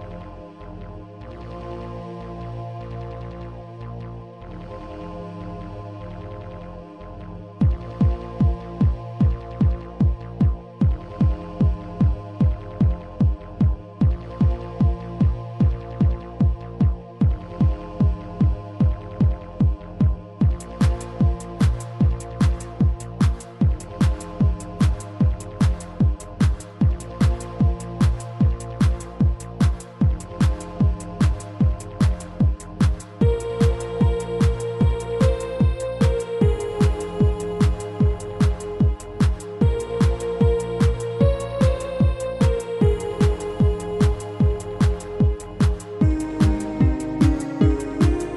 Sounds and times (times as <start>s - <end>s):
Techno: 0.0s - 48.3s.